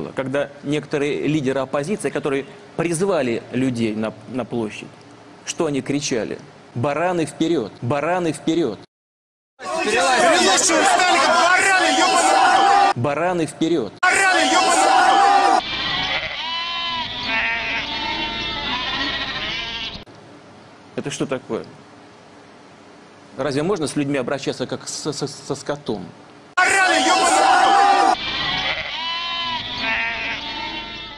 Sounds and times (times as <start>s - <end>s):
Speech: 0.0s - 8.9s, 13.0s - 14.9s, 21.0s - 21.8s, 23.4s - 27.4s
Bleat: 15.6s - 20.1s, 28.2s - 31.1s.